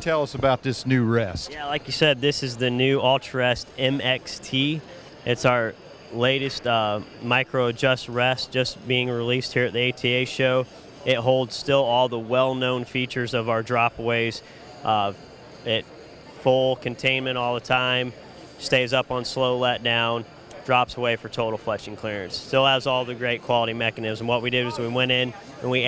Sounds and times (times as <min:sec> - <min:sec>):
Speech: 0:00.0 - 0:25.8.